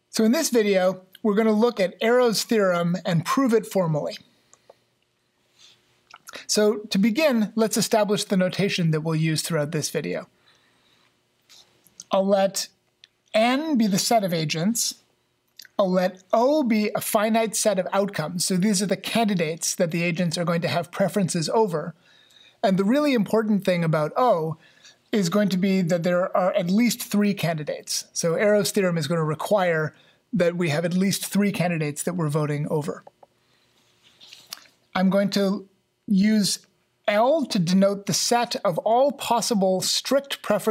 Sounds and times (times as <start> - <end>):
Speech: 0.1 - 4.3, 6.3 - 10.3, 12.0 - 15.0, 15.6 - 22.0, 22.6 - 33.1, 34.9 - 40.7.